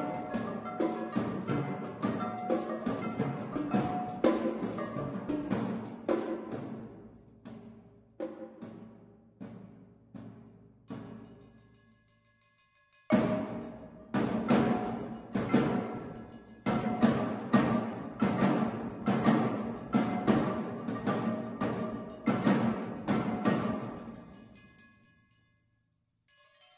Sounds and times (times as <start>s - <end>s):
Drum kit: 13.1s - 24.2s.